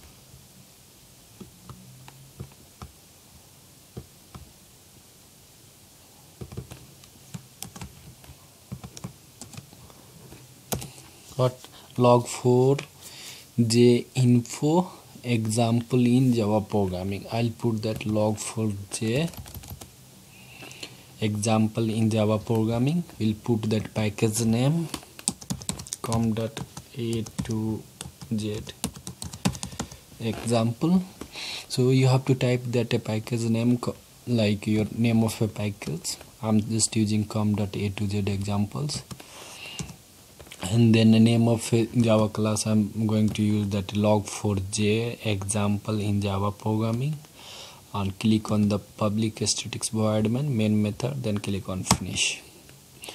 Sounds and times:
Computer keyboard: 8.7s - 9.7s, 19.2s - 19.9s, 24.9s - 30.0s.

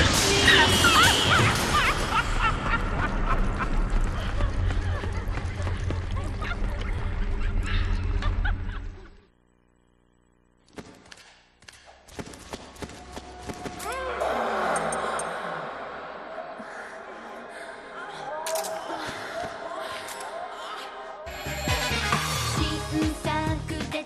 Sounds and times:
Music: 21.3s - 24.0s.

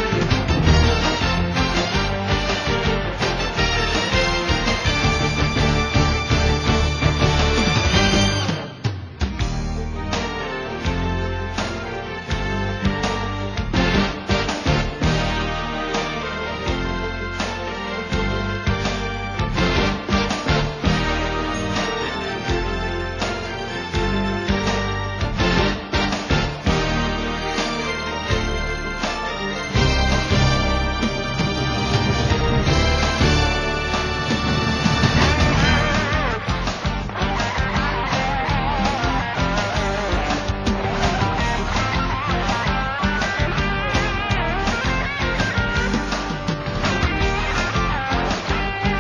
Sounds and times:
Music: 0.0s - 49.0s.

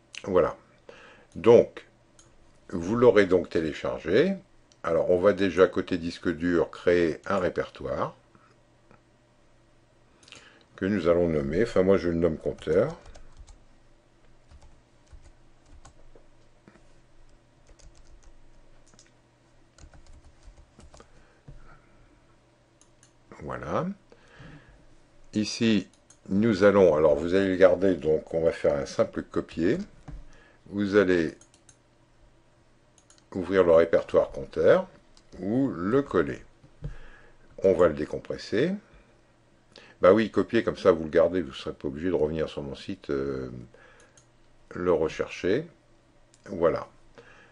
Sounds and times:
Speech: 0.2s - 0.6s, 1.4s - 1.9s, 2.7s - 8.2s, 10.8s - 13.2s, 23.3s - 24.0s, 25.4s - 30.0s, 30.7s - 31.4s, 33.3s - 36.5s, 37.6s - 38.9s, 40.0s - 43.8s, 44.7s - 45.8s, 46.4s - 47.0s
Clicking: 22.8s - 23.2s, 25.9s - 26.2s, 31.4s - 31.8s, 33.0s - 33.3s, 44.0s - 44.3s.

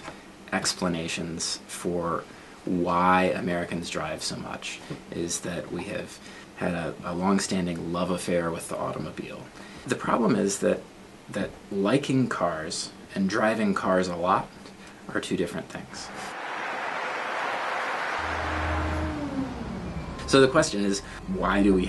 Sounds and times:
Speech: 0.5s - 16.2s, 20.3s - 21.8s
Car passing by: 16.0s - 21.8s.

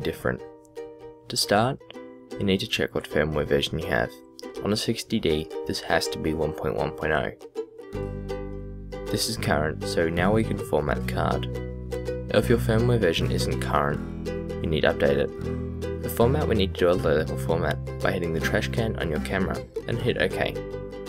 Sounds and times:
Speech: 0.0s - 0.4s, 1.3s - 1.8s, 2.4s - 7.4s, 9.1s - 11.5s, 12.3s - 14.0s, 14.6s - 15.4s, 16.1s - 20.6s
Music: 0.0s - 21.0s.

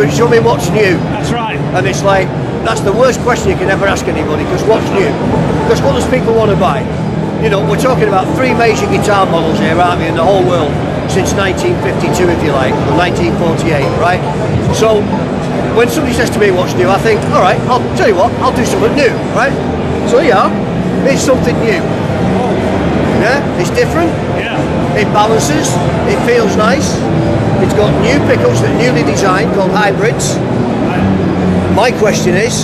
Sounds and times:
Speech: 0.0s - 6.8s, 7.4s - 15.1s, 27.6s - 32.6s.

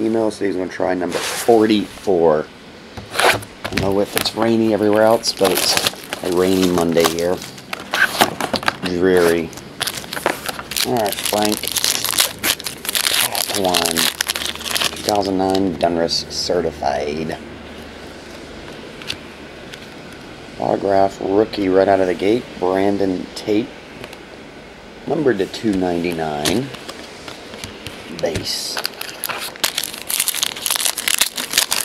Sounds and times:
Speech: 0.0s - 2.5s, 3.8s - 7.4s, 8.8s - 9.5s, 10.8s - 11.6s, 13.2s - 14.1s, 15.0s - 17.4s, 20.6s - 23.7s, 25.0s - 26.8s, 28.1s - 28.9s.

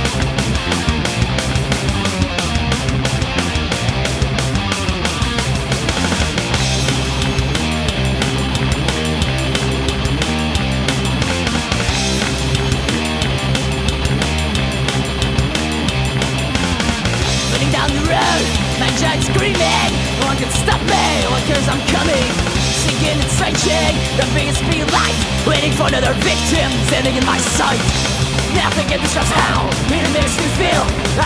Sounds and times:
Music: 0.0s - 31.2s.

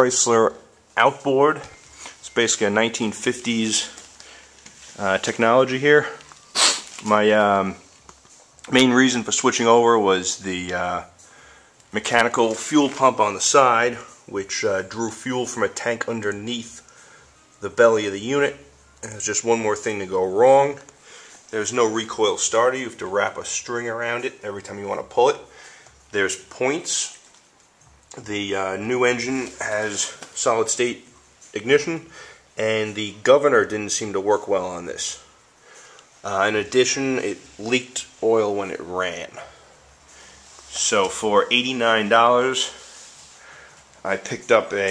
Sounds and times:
Speech: 0.0s - 4.0s, 5.0s - 6.3s, 7.0s - 7.9s, 8.6s - 11.2s, 11.9s - 16.8s, 17.6s - 20.9s, 21.5s - 25.5s, 26.1s - 27.2s, 28.2s - 35.3s, 36.2s - 39.6s, 40.7s - 42.9s, 44.0s - 44.9s.

